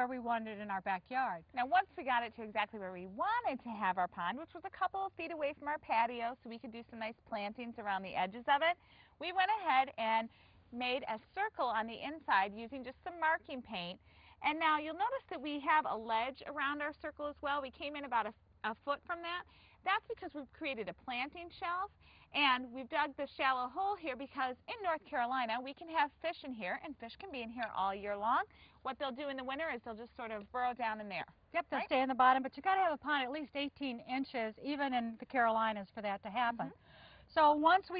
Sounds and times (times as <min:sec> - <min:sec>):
Speech: 0:00.0 - 0:37.9.